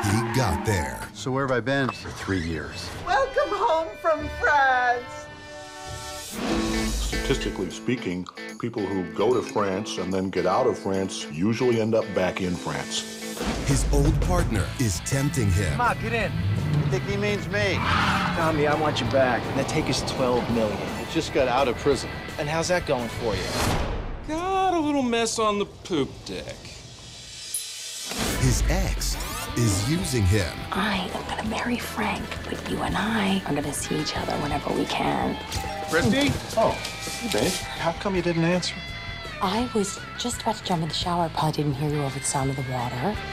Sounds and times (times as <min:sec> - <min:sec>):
Music: 0:00.0 - 0:43.3.